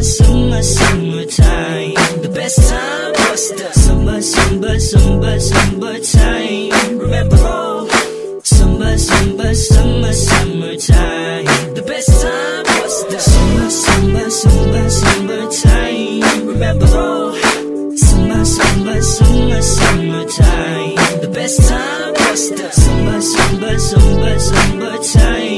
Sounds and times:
Music: 0.0s - 25.5s.

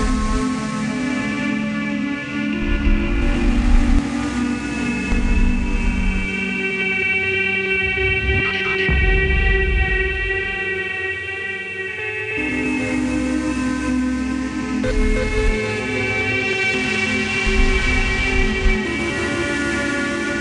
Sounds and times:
Music: 0.0s - 20.4s.

